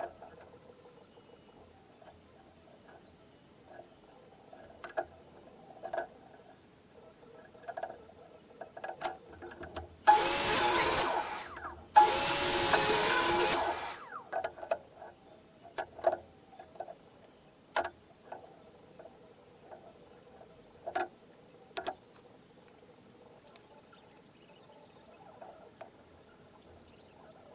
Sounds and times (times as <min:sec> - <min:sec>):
Inside, small room: 0:00.0 - 0:27.5.